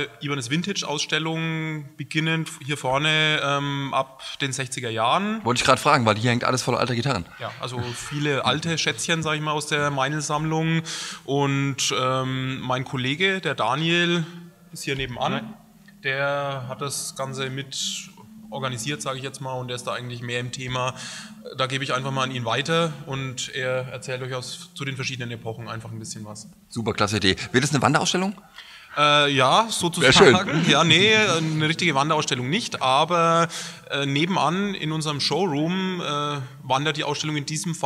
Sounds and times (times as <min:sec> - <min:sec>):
Speech: 0:00.0 - 0:28.4, 0:29.0 - 0:37.8.